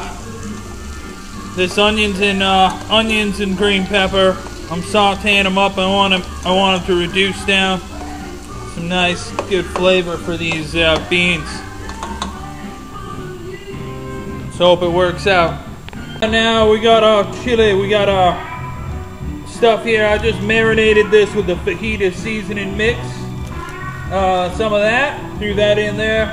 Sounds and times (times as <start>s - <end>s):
Music: 0.0s - 26.3s
Speech: 1.6s - 7.9s, 8.7s - 11.6s, 14.5s - 15.6s, 16.2s - 18.6s, 19.5s - 23.2s, 24.1s - 26.3s.